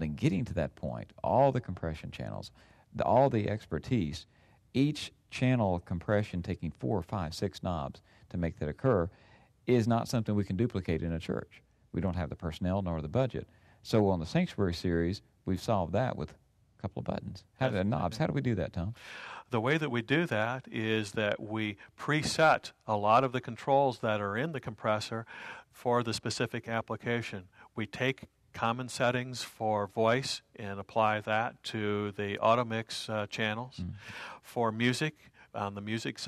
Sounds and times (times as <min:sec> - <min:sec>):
Speech: 0:00.0 - 0:36.2.